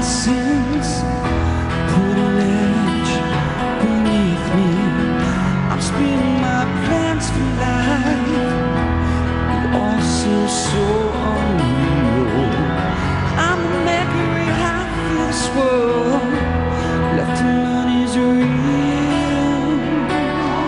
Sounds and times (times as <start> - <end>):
Music: 0.0 - 20.6.